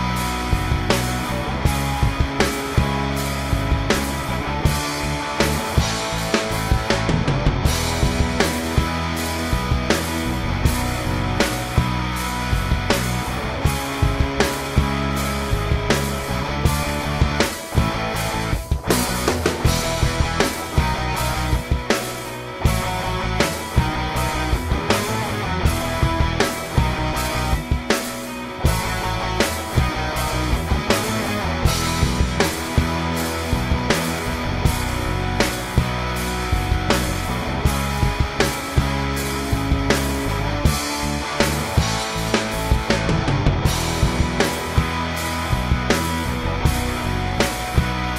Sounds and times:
Music: 0.0s - 48.1s.

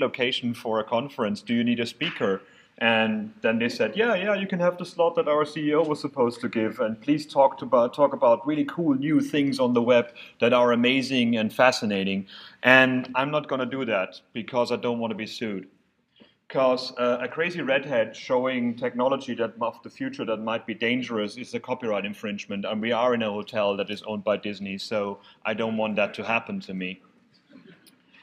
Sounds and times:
Speech: 0.0s - 15.7s, 16.5s - 27.0s.

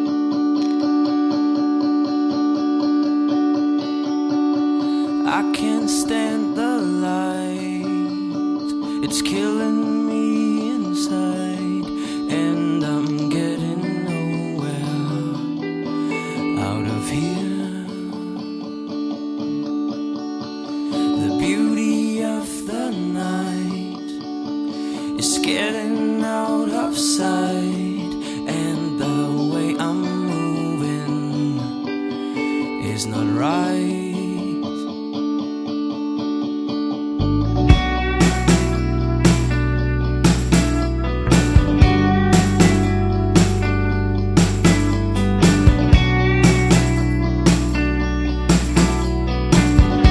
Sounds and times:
Soul music: 0.0s - 50.1s.

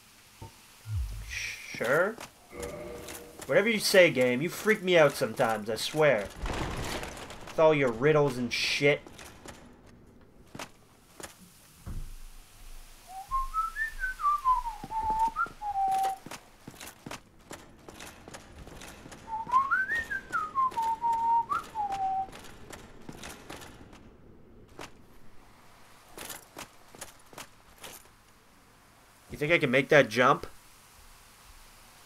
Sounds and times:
Whistling: 13.0s - 16.3s, 19.2s - 22.5s.

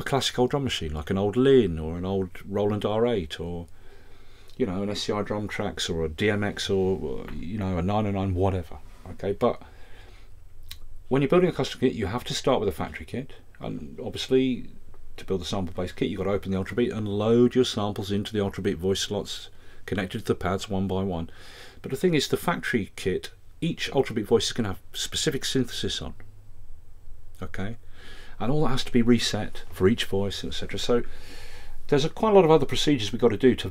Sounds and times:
Speech: 0.0s - 3.7s, 4.6s - 9.7s, 11.1s - 26.2s, 27.4s - 27.8s, 28.4s - 31.1s, 31.9s - 33.7s.

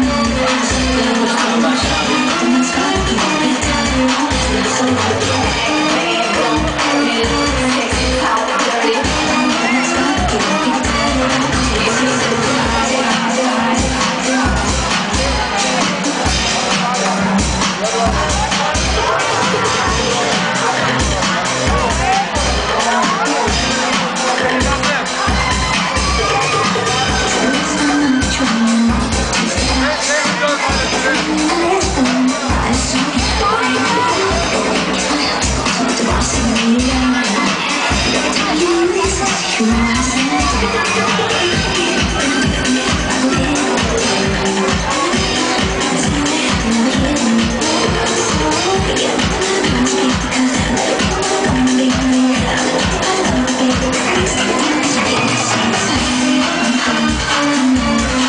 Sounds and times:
Music: 0.0s - 58.2s
Speech: 0.0s - 58.2s.

